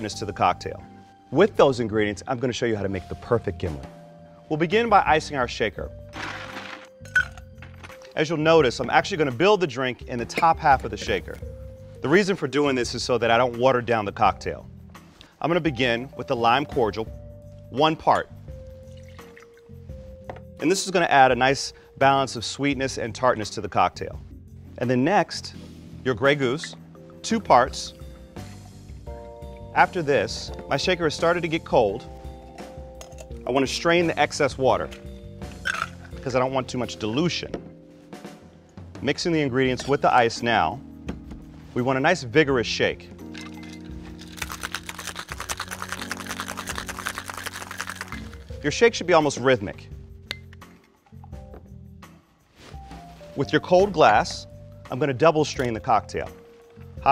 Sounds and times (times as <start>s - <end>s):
Speech: 0.0s - 3.9s, 4.5s - 5.9s, 8.2s - 11.4s, 12.0s - 14.6s, 15.4s - 17.1s, 17.7s - 18.3s, 20.6s - 24.2s, 24.8s - 28.0s, 29.8s - 32.0s, 33.4s - 35.0s, 36.2s - 37.6s, 39.0s - 40.8s, 41.8s - 43.1s, 48.6s - 49.9s, 53.4s - 56.4s
Music: 0.0s - 57.1s.